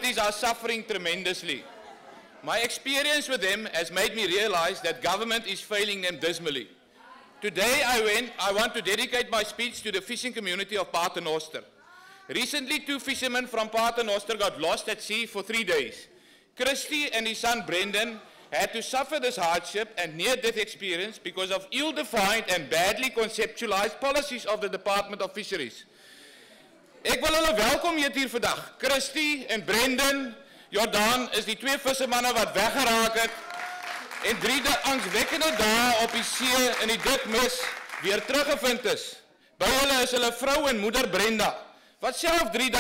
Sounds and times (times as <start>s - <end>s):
Male speech, man speaking: 0.0s - 1.6s, 2.4s - 6.7s, 7.4s - 11.7s, 12.3s - 25.8s, 27.0s - 33.4s, 34.2s - 42.8s
Narration, monologue: 0.0s - 42.8s.